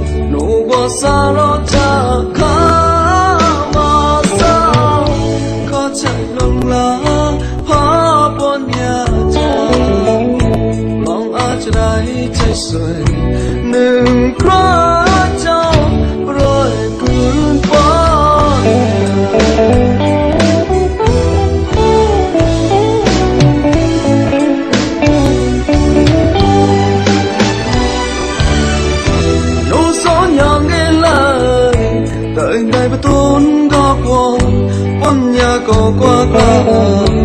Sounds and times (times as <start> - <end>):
Music: 0.0 - 37.2.